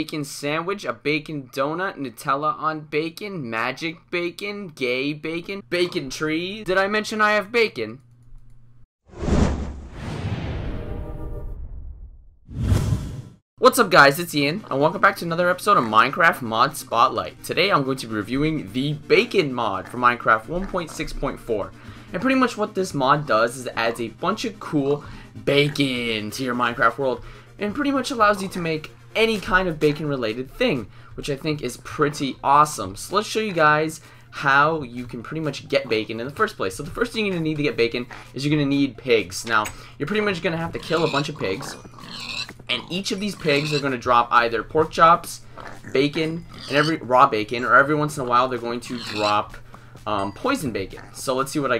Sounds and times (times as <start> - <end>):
Speech: 0.0 - 8.0, 13.6 - 41.8, 42.7 - 51.8
Music: 13.6 - 41.4, 43.2 - 51.8.